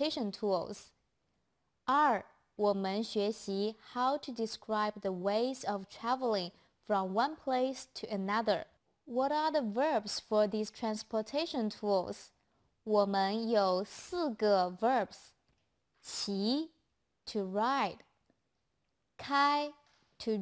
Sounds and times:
Speech: 0.0 - 1.0, 1.9 - 15.4, 16.0 - 18.0, 19.2 - 20.4.

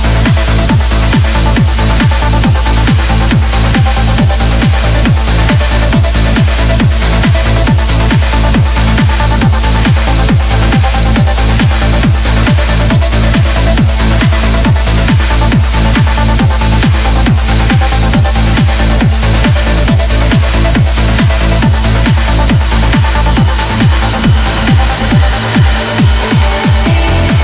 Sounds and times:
Music: 0.0 - 27.4
Sound effect: 0.0 - 27.4.

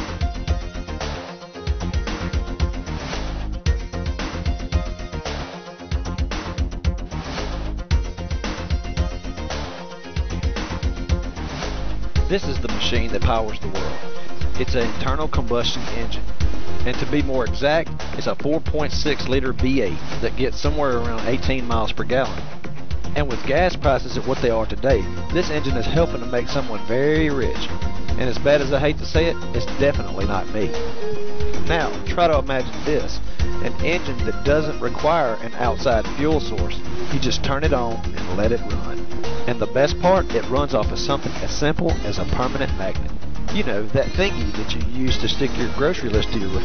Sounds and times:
Music: 0.0 - 46.6
Speech: 12.3 - 22.4, 23.1 - 30.8, 31.6 - 46.6.

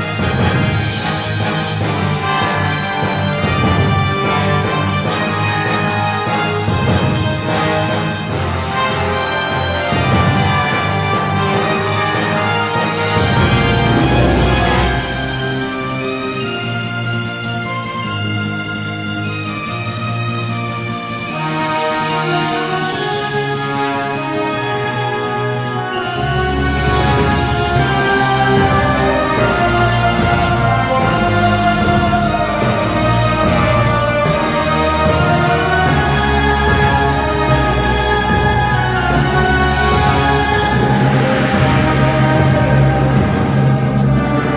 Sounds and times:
Music: 0.0 - 44.5.

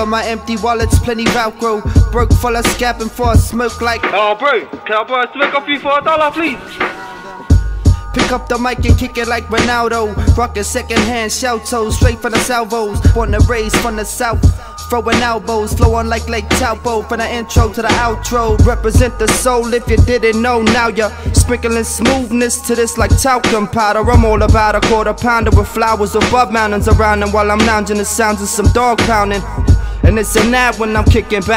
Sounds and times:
Music: 0.0 - 31.5.

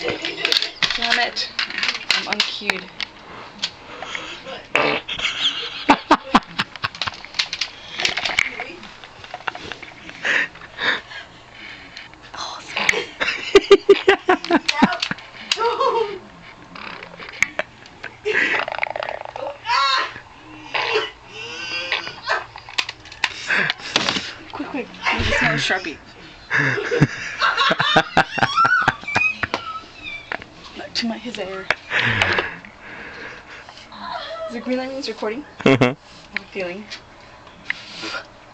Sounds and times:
Fart: 4.8 - 5.1, 18.6 - 19.6.

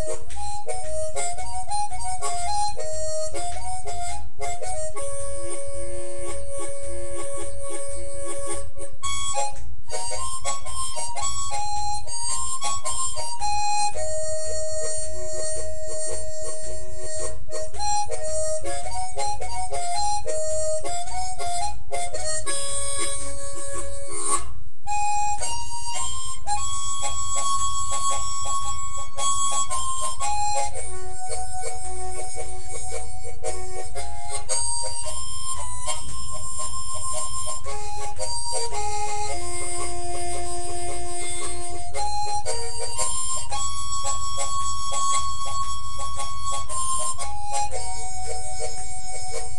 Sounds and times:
Harmonica: 0.0 - 49.5.

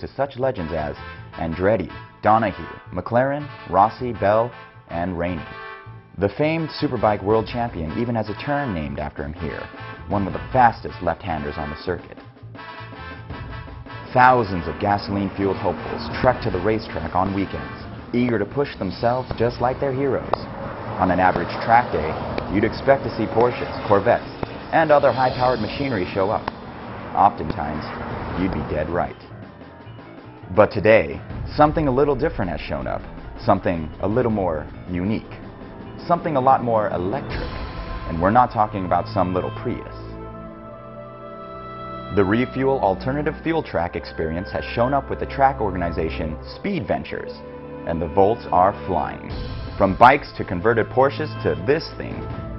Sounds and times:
Speech: 0.0 - 5.5, 6.2 - 12.2, 14.1 - 26.5, 27.2 - 29.3, 30.5 - 35.4, 36.0 - 40.2, 42.1 - 52.3
Music: 0.0 - 52.5
Car: 14.4 - 29.8.

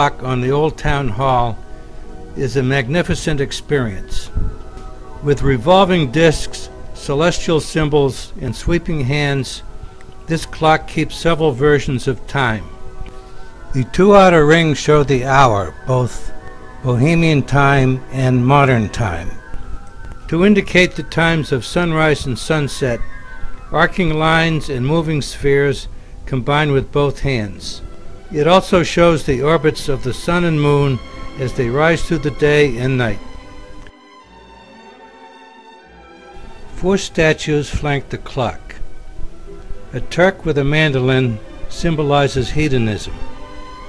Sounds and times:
Speech: 0.0 - 1.6, 2.4 - 4.4, 5.3 - 9.6, 10.3 - 12.7, 13.8 - 19.4, 20.3 - 23.0, 23.8 - 27.8, 28.4 - 33.2, 36.8 - 38.8, 40.0 - 43.2
Music: 0.0 - 43.8.

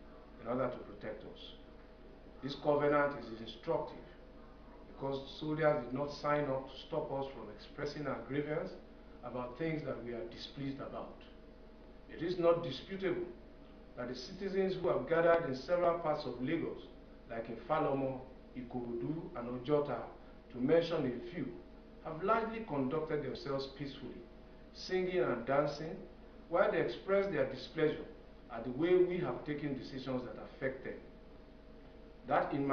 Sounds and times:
Narration, monologue: 0.0 - 32.7
Male speech, man speaking: 0.4 - 1.7, 2.4 - 4.2, 4.9 - 11.4, 12.1 - 13.4, 14.0 - 31.1, 32.3 - 32.7.

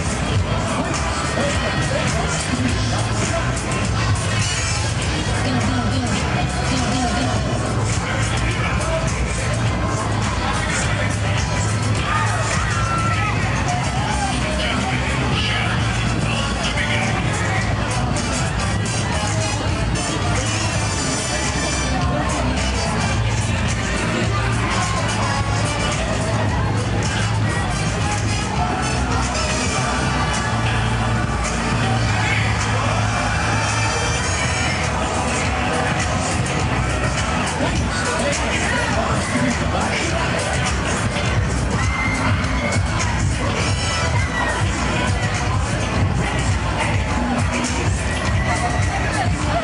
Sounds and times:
Music: 0.0 - 49.6
Speech: 0.0 - 49.6.

